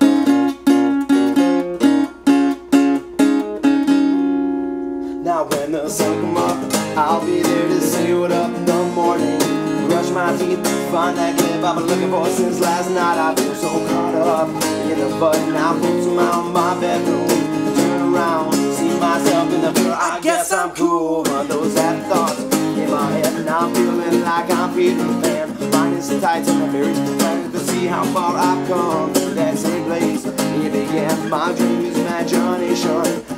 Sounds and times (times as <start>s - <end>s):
Music: 0.0s - 33.3s.